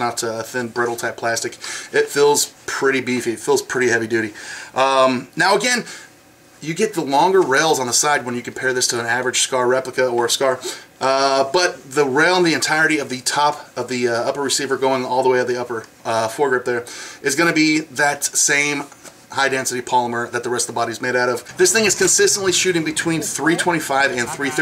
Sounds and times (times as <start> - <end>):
Speech: 0.0 - 5.9, 6.6 - 24.6.